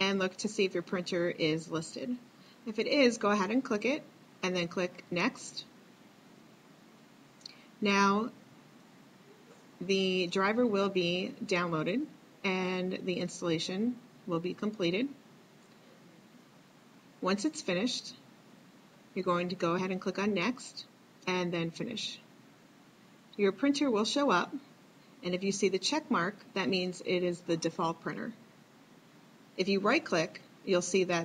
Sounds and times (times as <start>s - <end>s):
Speech: 0.0s - 5.7s, 7.8s - 8.4s, 9.4s - 15.2s, 17.2s - 18.2s, 19.2s - 22.3s, 23.4s - 28.4s, 29.6s - 31.2s.